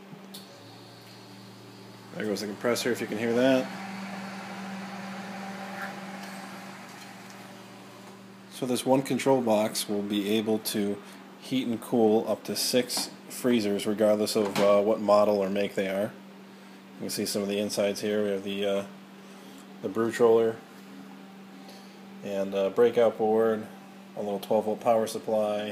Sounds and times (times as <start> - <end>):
Speech: 2.1 - 3.7, 8.5 - 16.2, 17.0 - 19.0, 19.8 - 20.7, 22.2 - 25.7.